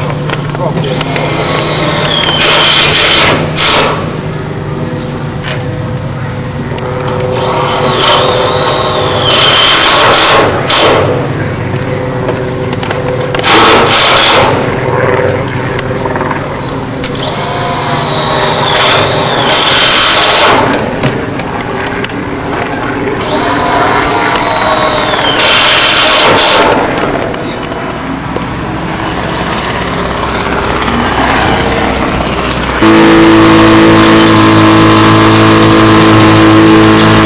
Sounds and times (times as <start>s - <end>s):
Vehicle: 0.0s - 37.2s.